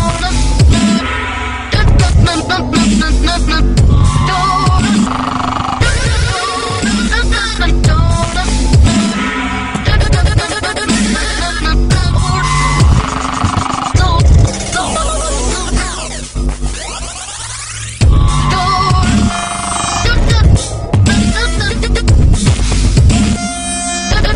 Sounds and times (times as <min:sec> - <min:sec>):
Dubstep: 0:00.0 - 0:24.3.